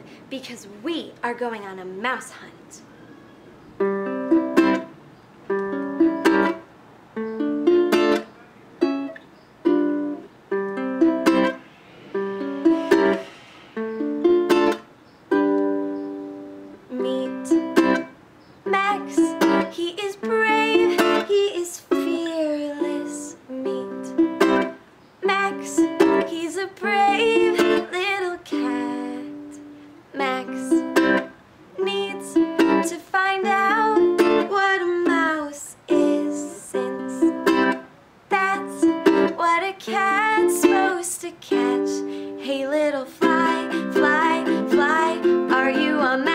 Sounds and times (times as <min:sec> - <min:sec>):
Music: 0:03.8 - 0:29.8, 0:30.4 - 0:42.4, 0:43.2 - 0:46.3.